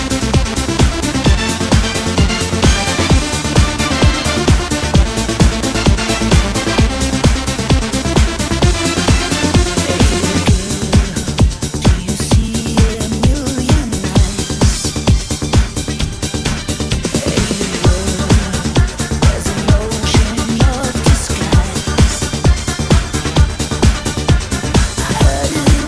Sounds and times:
Techno: 0.0 - 25.8.

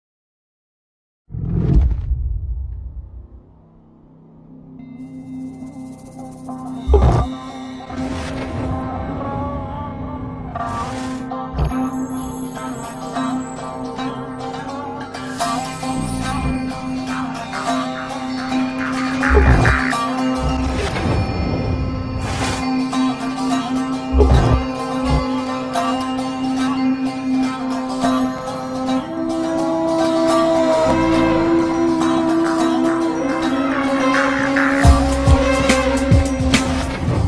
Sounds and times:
Music: 3.2 - 37.2.

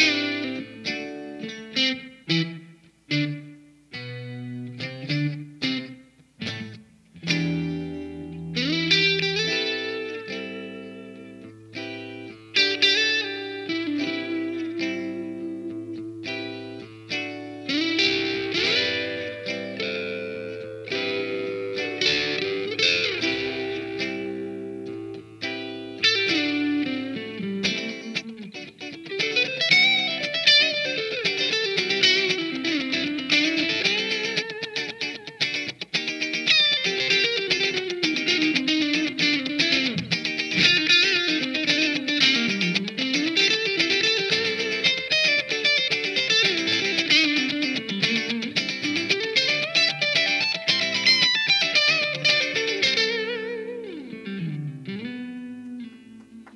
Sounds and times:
Electric guitar: 0.0 - 56.5.

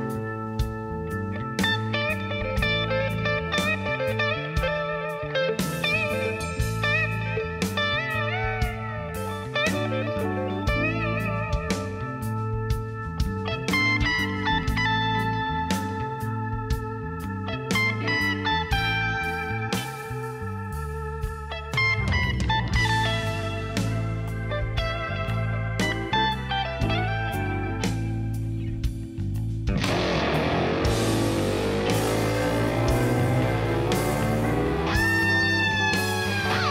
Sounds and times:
Guitar: 0.0 - 36.7.

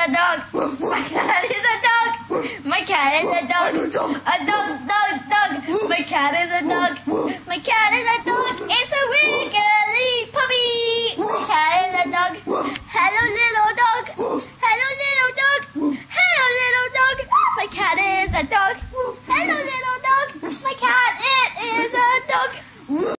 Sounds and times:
Speech: 0.0 - 23.1.

